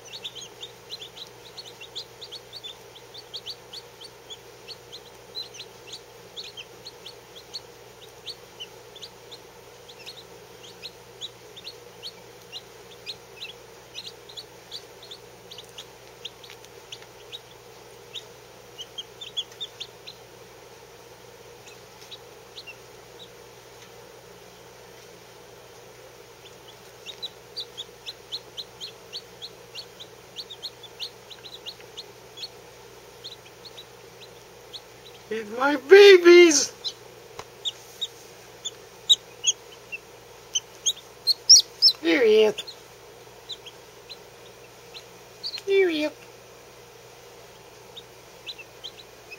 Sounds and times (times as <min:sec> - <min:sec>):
Bird: 0:00.0 - 0:20.2, 0:38.6 - 0:42.8
Domestic animals, pets: 0:00.0 - 0:20.2, 0:21.6 - 0:23.9, 0:26.4 - 0:35.3, 0:36.6 - 0:37.0, 0:37.6 - 0:42.8, 0:43.4 - 0:46.3, 0:47.5 - 0:49.3.